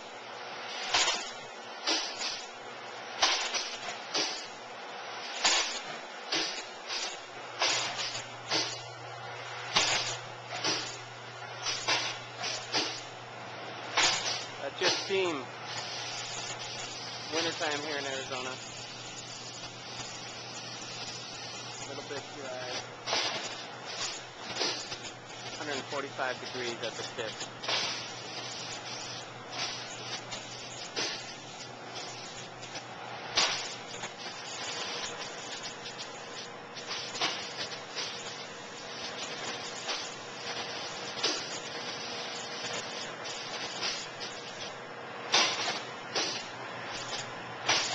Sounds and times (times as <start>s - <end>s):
Speech: 14.6s - 15.5s, 17.3s - 18.6s, 21.9s - 22.8s, 25.6s - 27.4s.